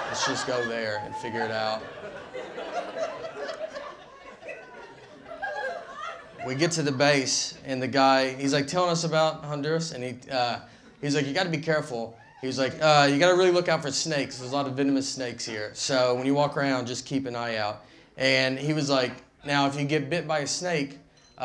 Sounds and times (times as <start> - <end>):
Speech: 0.0 - 1.9, 6.4 - 21.4
Inside, large room or hall: 0.0 - 21.4.